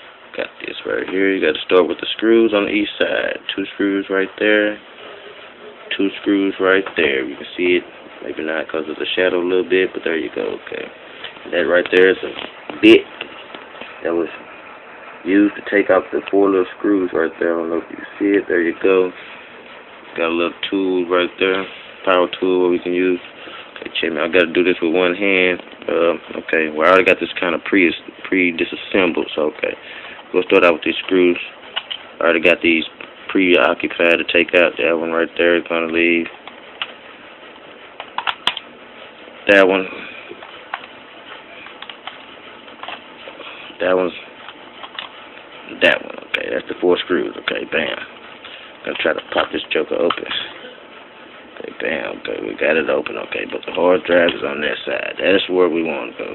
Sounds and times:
Speech: 0:00.3 - 0:04.9, 0:05.6 - 0:13.3, 0:14.0 - 0:14.5, 0:15.2 - 0:19.2, 0:20.2 - 0:31.6, 0:32.2 - 0:36.4, 0:39.4 - 0:40.4, 0:43.8 - 0:44.4, 0:45.6 - 0:48.1, 0:48.8 - 0:50.8, 0:51.5 - 0:56.3.

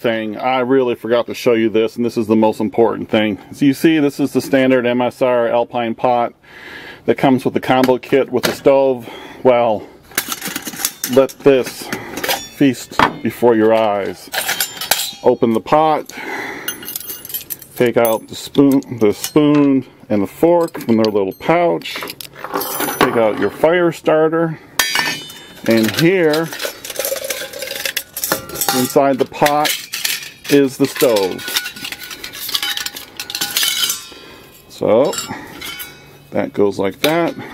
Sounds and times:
Speech: 0:00.0 - 0:06.4, 0:07.1 - 0:09.9, 0:11.1 - 0:11.9, 0:12.6 - 0:14.3, 0:15.2 - 0:16.2, 0:17.8 - 0:22.1, 0:23.0 - 0:24.6, 0:25.7 - 0:26.6, 0:28.6 - 0:29.8, 0:30.5 - 0:31.4, 0:34.7 - 0:35.4, 0:36.3 - 0:37.5.

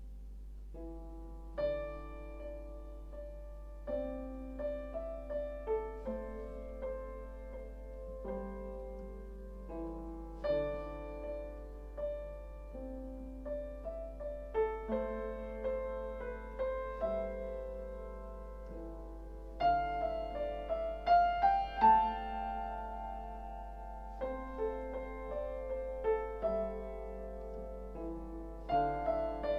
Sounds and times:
Piano: 0:00.0 - 0:29.5.

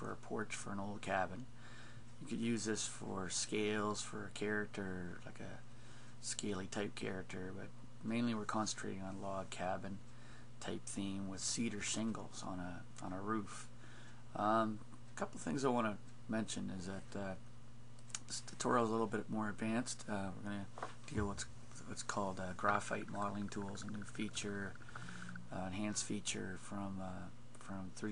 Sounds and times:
Speech: 0:00.0 - 0:01.5, 0:02.2 - 0:10.0, 0:10.6 - 0:13.7, 0:14.3 - 0:17.4, 0:18.2 - 0:28.1.

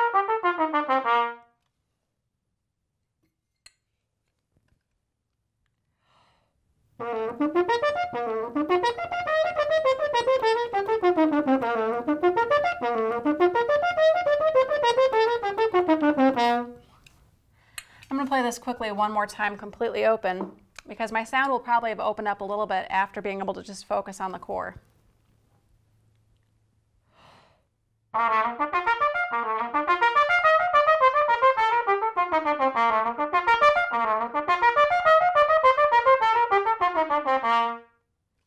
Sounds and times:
Trumpet: 0:00.0 - 0:01.6, 0:07.0 - 0:17.0, 0:28.1 - 0:38.0.

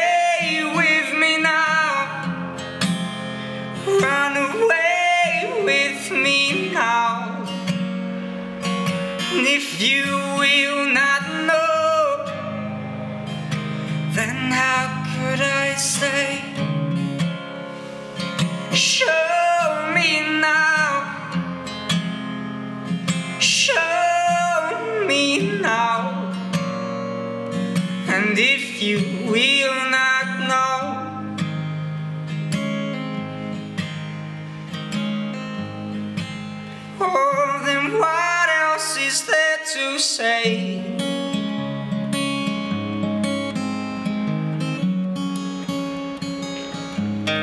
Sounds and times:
Strum: 0:00.0 - 0:38.4.

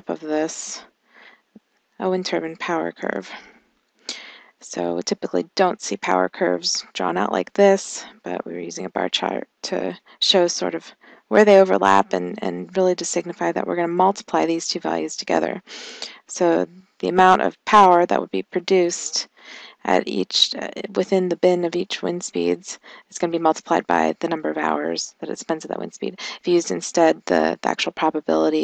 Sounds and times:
Speech: 0:00.0 - 0:00.8, 0:02.0 - 0:03.5, 0:04.1 - 0:28.6.

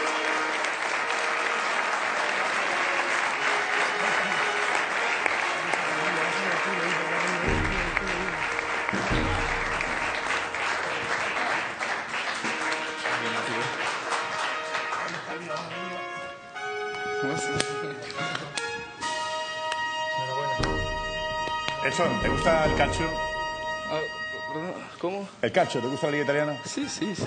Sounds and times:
Applause: 0:00.0 - 0:16.1, 0:20.6 - 0:23.2
Music: 0:00.0 - 0:27.2.

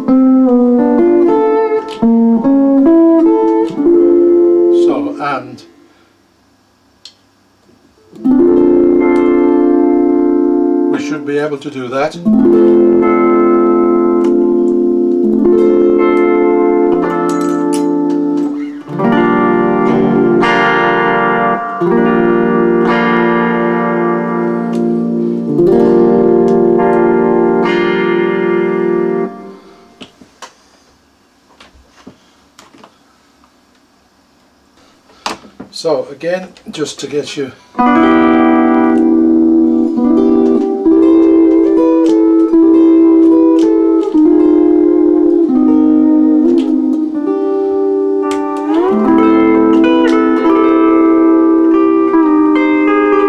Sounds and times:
Steel guitar, slide guitar: 0:00.0 - 0:05.2, 0:08.0 - 0:30.0, 0:37.8 - 0:53.2
Speech: 0:04.7 - 0:05.7, 0:10.9 - 0:12.3, 0:35.7 - 0:37.6.

